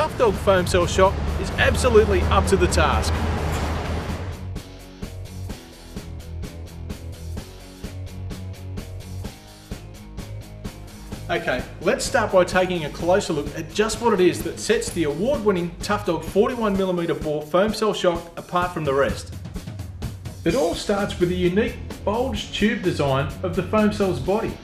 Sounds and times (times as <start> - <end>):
Speech: 0.0 - 3.1, 11.3 - 19.3, 20.5 - 24.6
Music: 0.0 - 24.6.